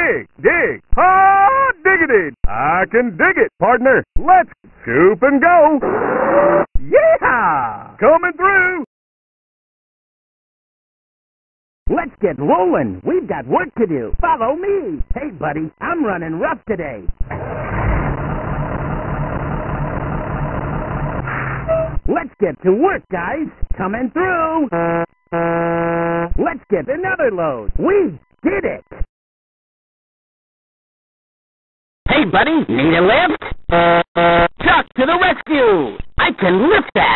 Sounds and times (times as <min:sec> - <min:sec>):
Speech: 0:00.0 - 0:05.8, 0:06.8 - 0:08.9, 0:11.9 - 0:17.1, 0:22.1 - 0:24.7, 0:26.4 - 0:29.1, 0:32.1 - 0:33.4, 0:34.6 - 0:37.1
Truck: 0:17.2 - 0:22.0.